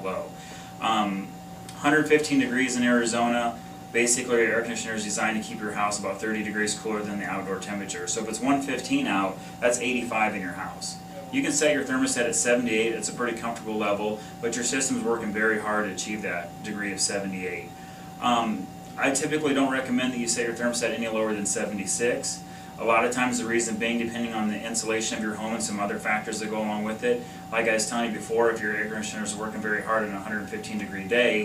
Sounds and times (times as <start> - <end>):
Air conditioning: 0.0 - 31.4
Speech: 0.0 - 31.4.